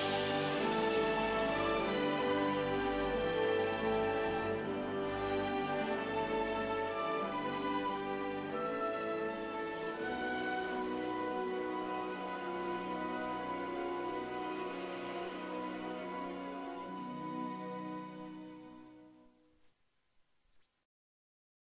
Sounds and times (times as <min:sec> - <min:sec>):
Music: 0:00.0 - 0:20.2.